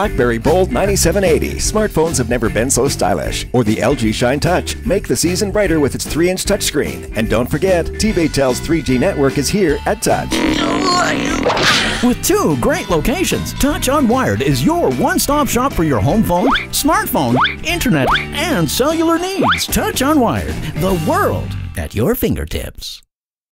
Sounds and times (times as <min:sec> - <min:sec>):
Music: 0:00.0 - 0:23.1
Speech: 0:00.0 - 0:23.1.